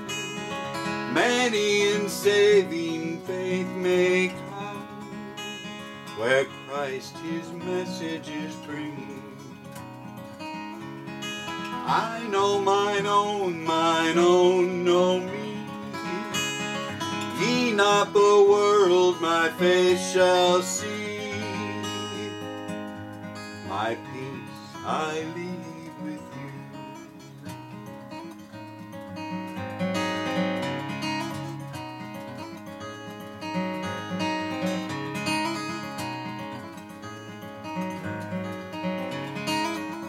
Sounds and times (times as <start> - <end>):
Strum: 0.0 - 40.0.